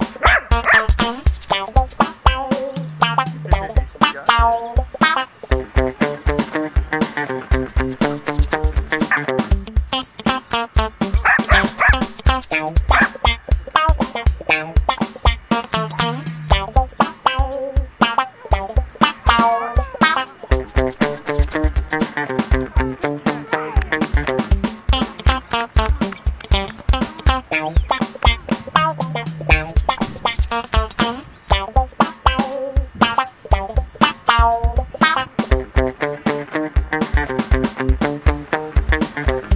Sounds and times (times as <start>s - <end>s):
Music: 0.0s - 39.5s
Bow-wow: 0.2s - 0.9s, 11.2s - 12.1s, 12.9s - 13.2s
Yip: 0.2s - 1.0s, 11.2s - 12.2s, 12.9s - 13.2s, 18.1s - 20.3s.